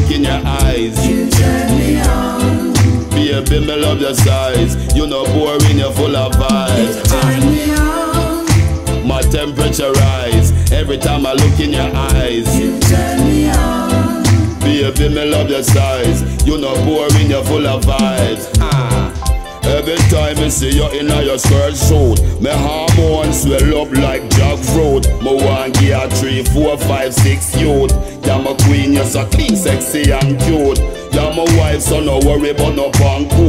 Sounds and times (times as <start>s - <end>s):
Music: 0.0s - 33.4s.